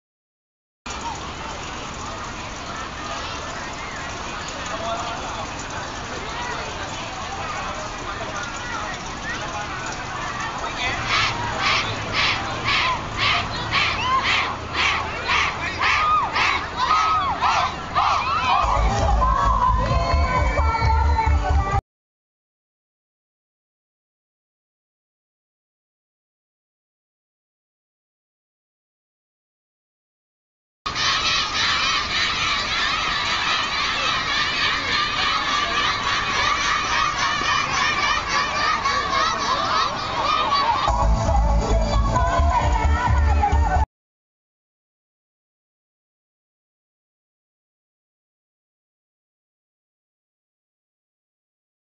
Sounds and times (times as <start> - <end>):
Outside, urban or manmade: 0.9 - 21.8, 30.9 - 43.9.